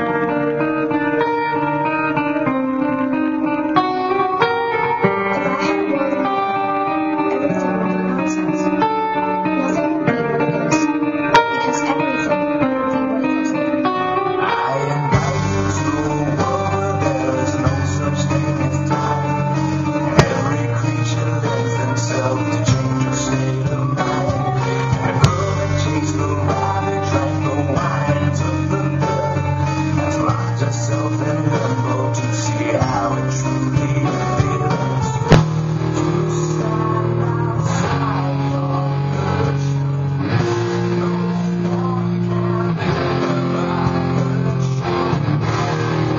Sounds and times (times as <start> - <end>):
Strum: 14.8 - 32.0, 33.7 - 37.0.